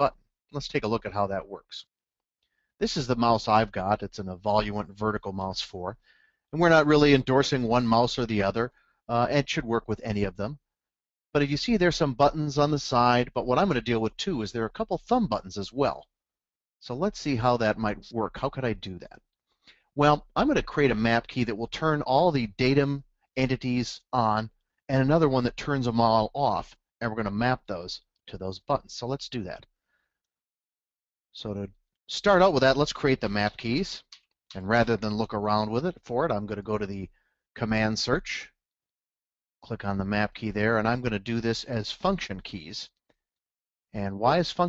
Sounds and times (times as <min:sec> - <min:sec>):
Speech: 0:00.0 - 0:01.9, 0:02.8 - 0:06.0, 0:06.6 - 0:10.6, 0:11.4 - 0:16.1, 0:16.8 - 0:19.2, 0:20.0 - 0:29.7, 0:31.4 - 0:38.6, 0:39.6 - 0:43.0, 0:44.0 - 0:44.6.